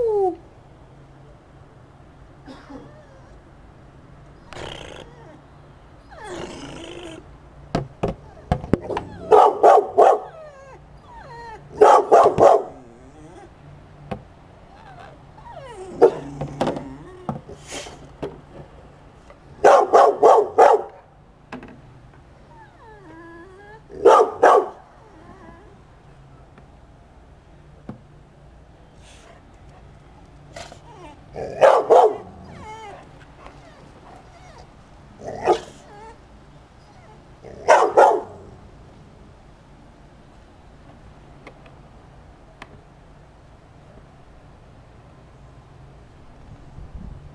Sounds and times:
Dog: 0:11.8 - 0:12.9, 0:30.6 - 0:34.6, 0:36.9 - 0:38.4.

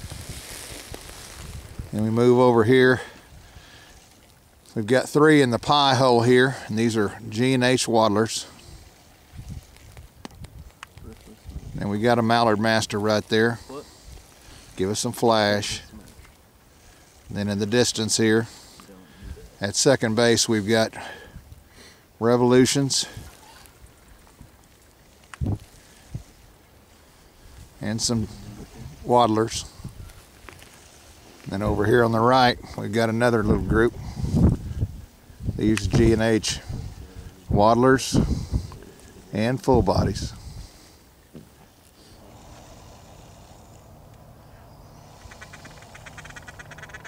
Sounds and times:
Speech: 0:11.0 - 0:13.9, 0:14.8 - 0:16.1, 0:17.3 - 0:21.0, 0:22.2 - 0:23.6, 0:27.8 - 0:29.7, 0:31.5 - 0:34.0, 0:35.6 - 0:38.3, 0:39.3 - 0:40.4.

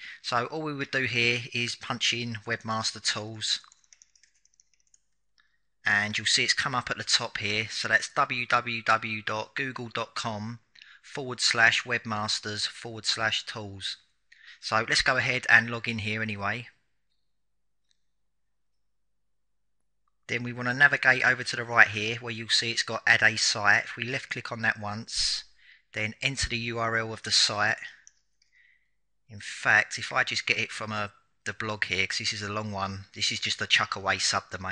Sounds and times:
Speech: 0:00.0 - 0:03.7, 0:05.8 - 0:16.8, 0:20.3 - 0:28.0, 0:29.3 - 0:34.7.

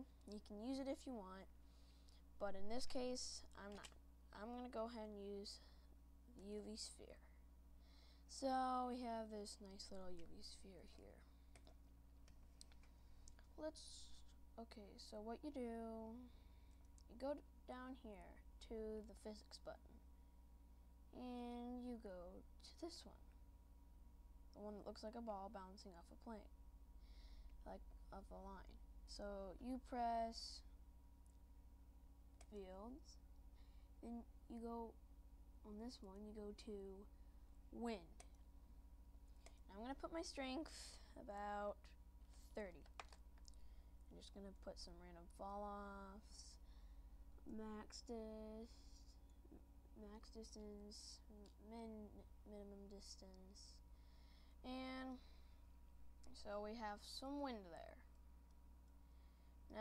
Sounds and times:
Speech: 0:00.0 - 0:01.5, 0:02.4 - 0:05.7, 0:06.3 - 0:07.4, 0:08.3 - 0:11.3, 0:13.5 - 0:16.3, 0:17.1 - 0:20.0, 0:21.1 - 0:23.2, 0:24.6 - 0:26.5, 0:27.6 - 0:30.7, 0:32.4 - 0:33.2, 0:34.0 - 0:35.0, 0:35.6 - 0:37.1, 0:37.7 - 0:38.3, 0:39.6 - 0:42.9, 0:44.1 - 0:46.6, 0:47.4 - 0:53.8, 0:54.6 - 0:55.3, 0:56.3 - 0:58.1.

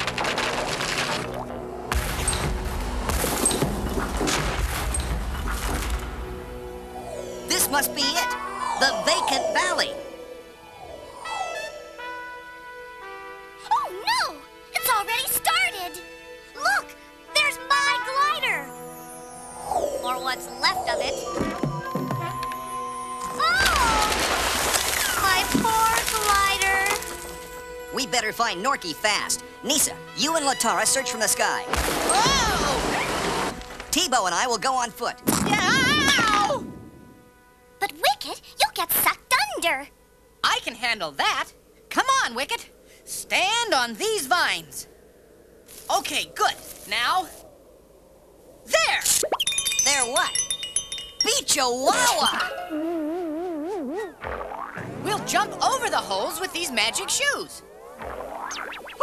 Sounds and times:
Music: 0:00.0 - 0:40.6
Outside, rural or natural: 0:00.0 - 0:59.0
Speech: 0:07.5 - 0:10.0, 0:25.2 - 0:27.0, 0:28.0 - 0:32.9, 0:33.9 - 0:36.6, 0:37.8 - 0:44.9, 0:45.9 - 0:47.4, 0:49.9 - 0:50.4, 0:51.2 - 0:52.6, 0:55.0 - 0:57.6.

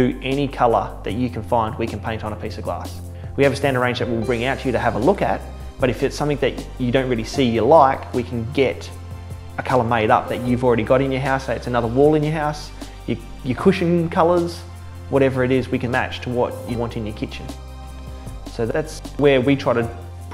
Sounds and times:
Speech: 0:00.0 - 0:09.0, 0:09.6 - 0:17.6, 0:18.5 - 0:20.0
Music: 0:00.0 - 0:20.3.

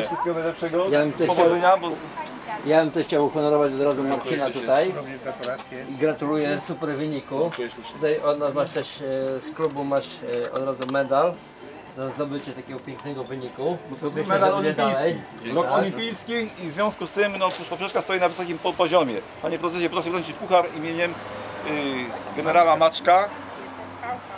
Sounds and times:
Male speech, man speaking: 0:00.0 - 0:02.0, 0:02.6 - 0:11.4, 0:12.0 - 0:23.3.

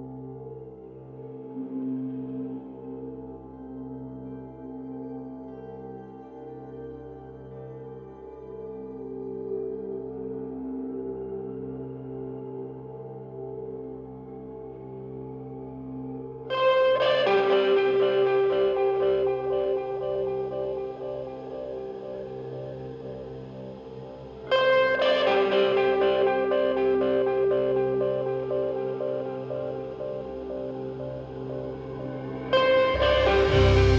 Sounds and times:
Music: 0:00.0 - 0:33.9.

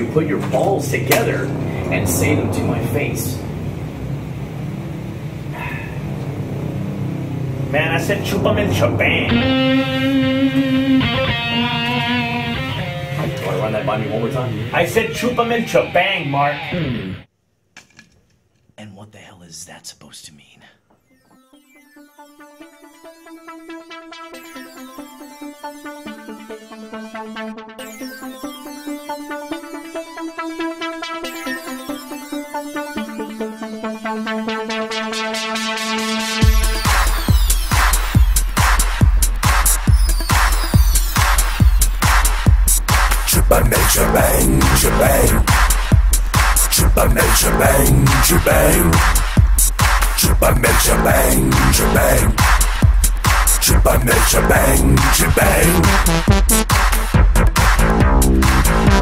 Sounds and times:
Trance music: 0:00.0 - 0:15.9, 0:21.0 - 0:59.0
Techno: 0:21.1 - 0:59.0.

